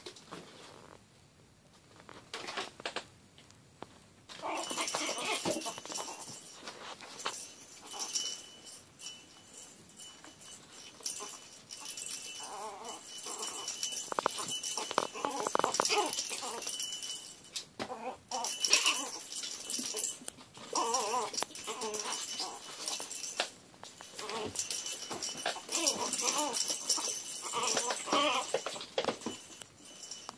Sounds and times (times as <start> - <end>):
Dog: 11.0 - 16.8, 25.4 - 28.8.